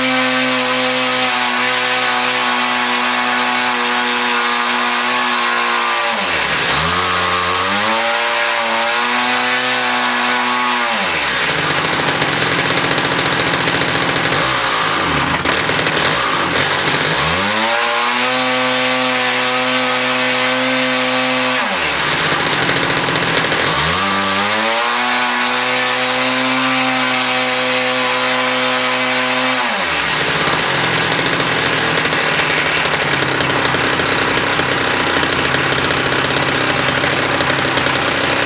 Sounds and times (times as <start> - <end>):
Accelerating, revving, vroom: 0.0 - 11.3, 17.0 - 22.0, 23.6 - 30.1.